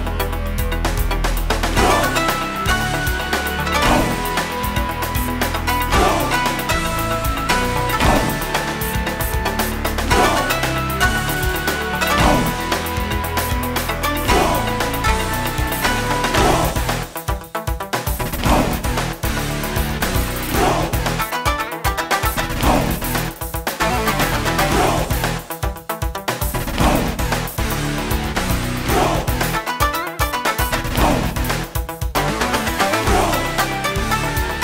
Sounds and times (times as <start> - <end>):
Video game music: 0.0 - 34.6.